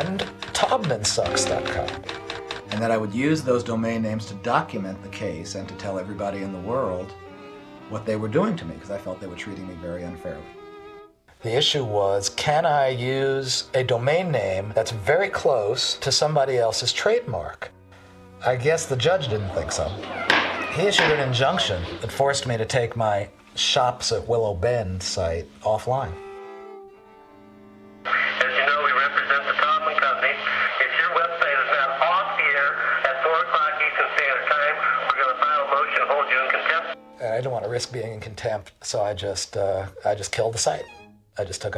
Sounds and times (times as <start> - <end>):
Speech: 0.0 - 2.0, 2.7 - 7.2, 7.9 - 10.5, 11.4 - 17.7, 18.4 - 20.0, 20.8 - 26.2, 28.1 - 41.7
Music: 0.0 - 41.7
Radio: 18.9 - 22.9, 28.1 - 37.0.